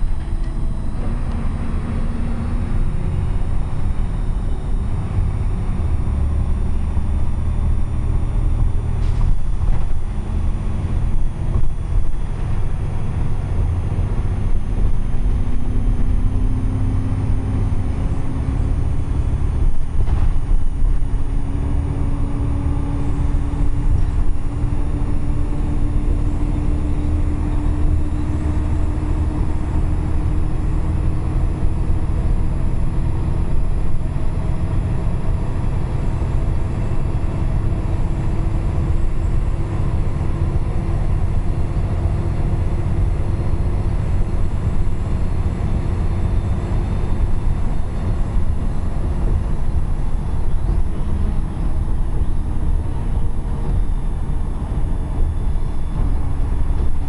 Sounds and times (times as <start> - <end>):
Bus: 0.0 - 57.0.